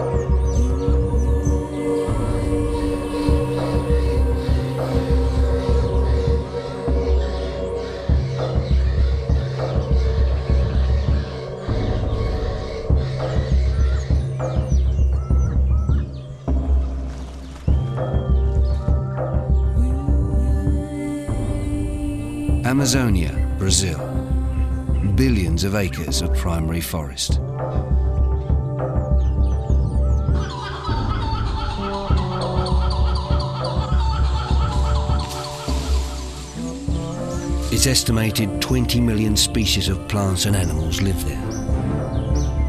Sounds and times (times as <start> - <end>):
Music: 0.0 - 42.6
Outside, rural or natural: 0.0 - 42.6.